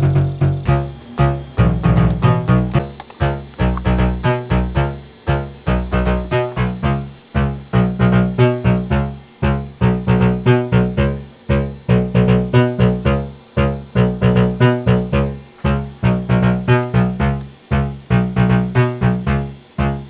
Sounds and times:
Sampler: 0:00.0 - 0:20.0.

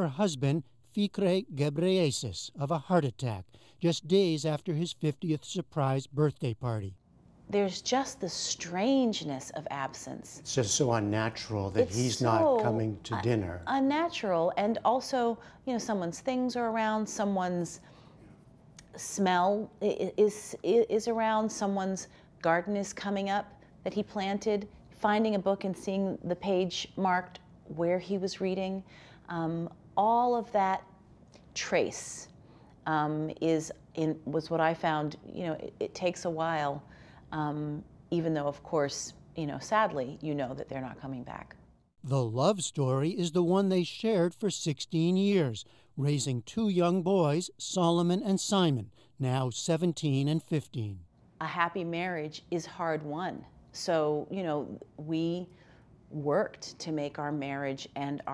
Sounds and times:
Speech: 0:00.0 - 0:07.0, 0:07.6 - 0:17.8, 0:37.4 - 0:55.4
Inside, small room: 0:00.0 - 0:58.3.

